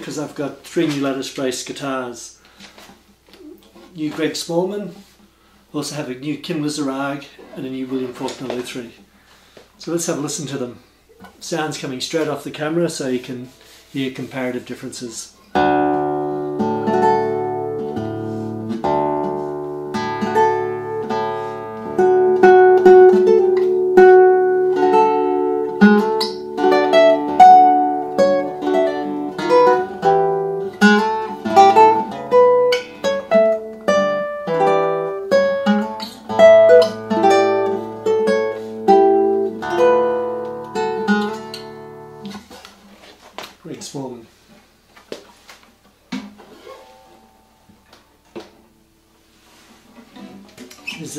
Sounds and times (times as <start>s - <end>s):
Acoustic guitar: 0.0s - 51.1s
Strum: 15.5s - 43.2s, 46.0s - 51.1s.